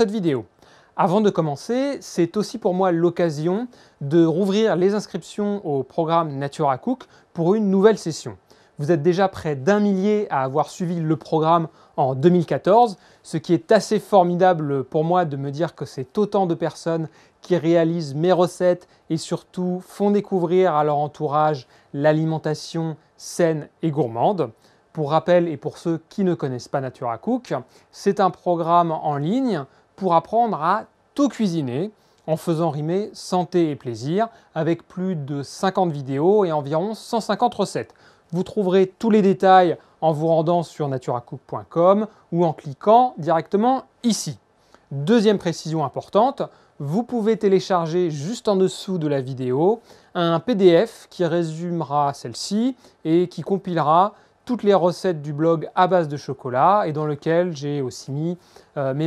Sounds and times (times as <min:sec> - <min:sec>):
Speech: 0:00.0 - 0:59.0.